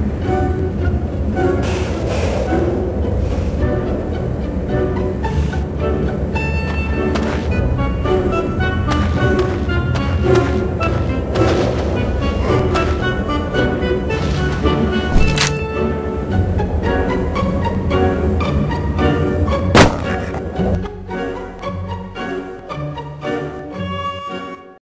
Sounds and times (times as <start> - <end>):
Music: 0.0 - 24.8.